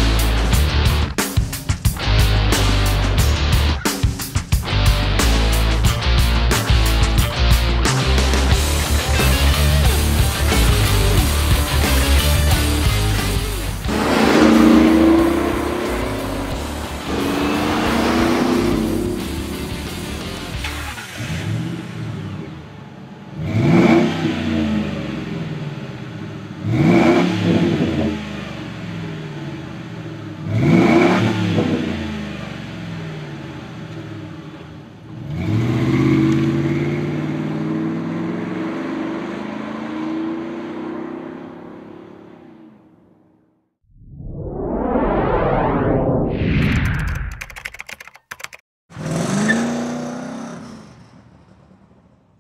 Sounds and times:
Music: 0.0s - 21.2s.

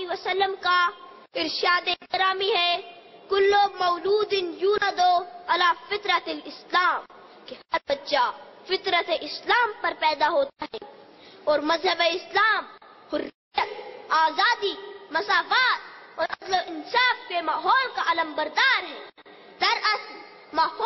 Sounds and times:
Child speech, kid speaking: 0.0s - 10.9s, 11.5s - 20.8s
Narration, monologue: 0.0s - 20.8s.

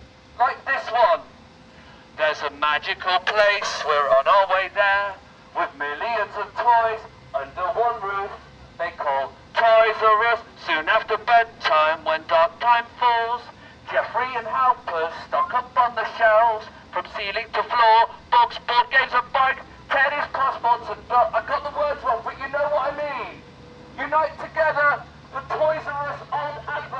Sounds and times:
Outside, urban or manmade: 0.0s - 26.9s
Speech: 0.4s - 1.3s, 2.2s - 23.4s, 24.0s - 26.9s.

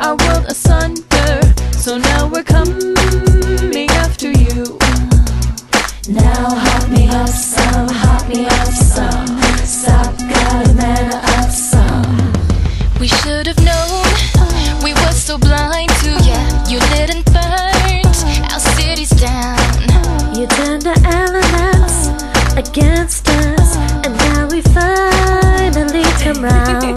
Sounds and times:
Music: 0.0s - 26.9s.

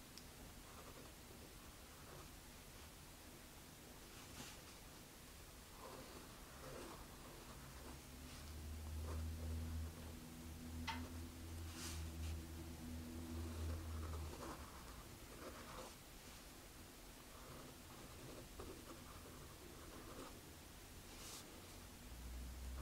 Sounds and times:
Writing: 0.6s - 2.9s, 5.7s - 10.2s, 11.7s - 16.4s, 17.2s - 20.4s.

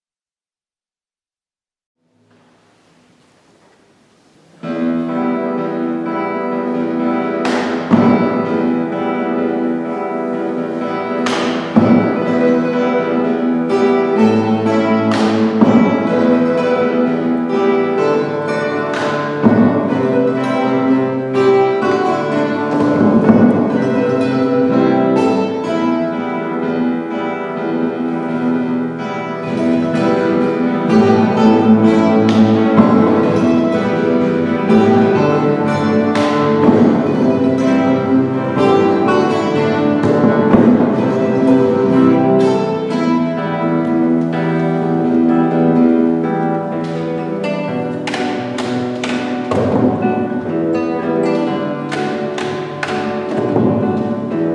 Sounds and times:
Strum: 2.0s - 54.5s.

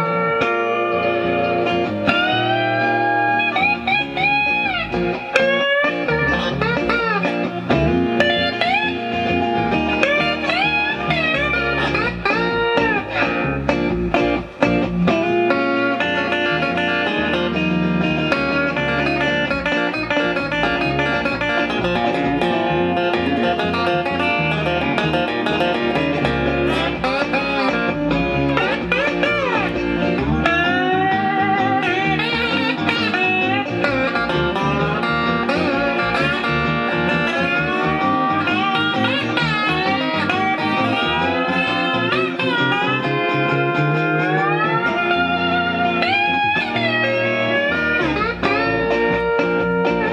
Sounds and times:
Blues: 0.0s - 50.1s
Electric guitar: 0.0s - 50.1s.

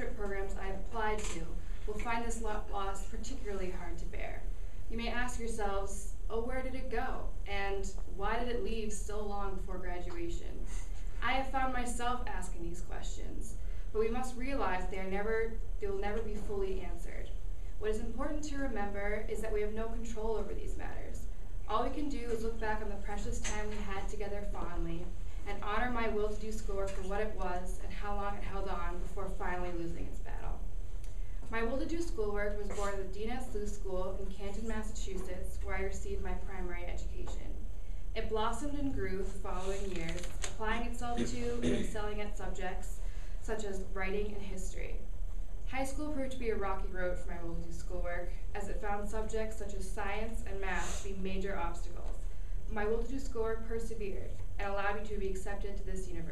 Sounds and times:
Female speech, woman speaking: 0.0s - 10.6s, 11.2s - 30.6s, 31.5s - 37.6s, 38.2s - 45.0s, 45.7s - 56.3s
Narration, monologue: 0.0s - 56.3s.

